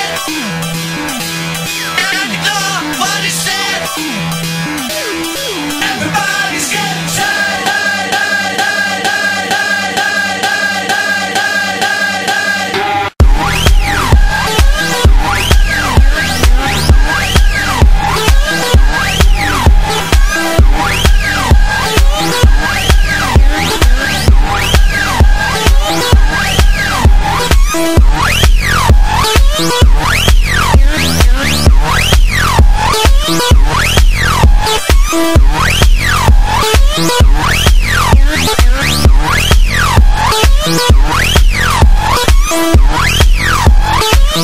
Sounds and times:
Music: 0.0 - 44.4.

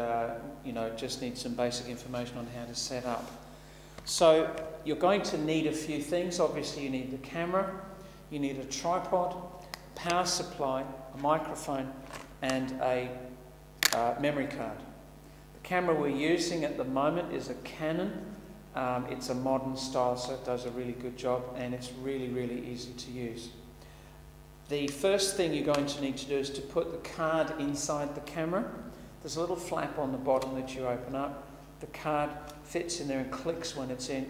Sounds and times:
Speech: 0.0 - 3.4, 4.1 - 15.0, 15.6 - 23.6, 24.7 - 34.2.

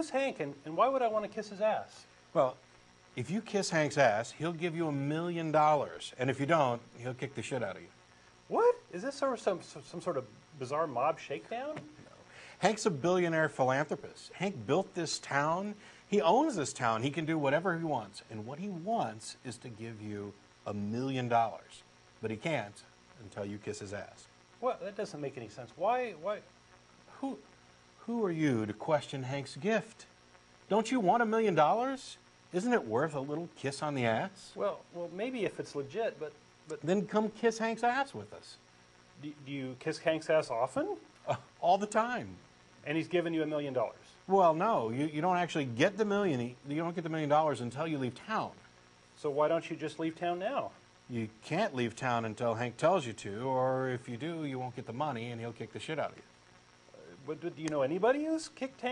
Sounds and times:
Speech: 0.0 - 2.6, 3.2 - 7.9, 8.5 - 26.5, 27.1 - 27.4, 28.0 - 30.1, 30.7 - 38.6, 39.2 - 48.6, 49.2 - 56.3, 56.9 - 58.9.

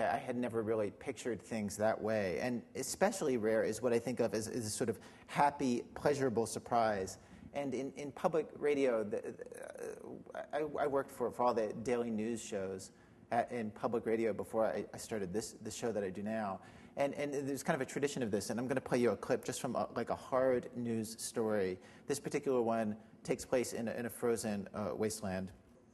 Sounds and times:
Speech: 0.0 - 25.6.

